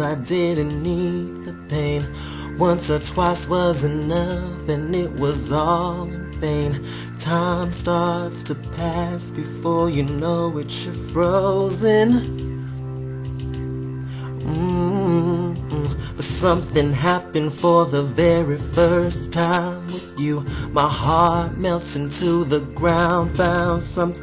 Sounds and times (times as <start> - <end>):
Male singing: 0.0 - 12.3, 14.4 - 24.2
Music: 0.0 - 24.2.